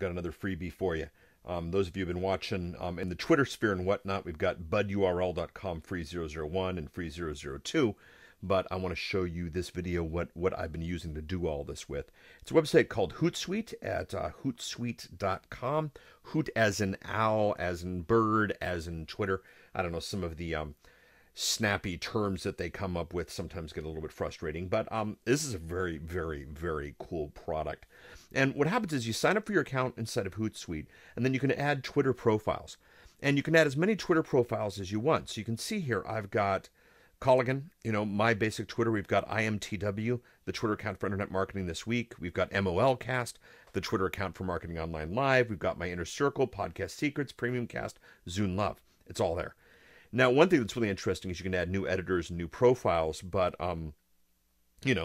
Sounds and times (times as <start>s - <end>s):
Speech: 0.0s - 20.8s, 21.4s - 54.0s, 54.8s - 55.0s.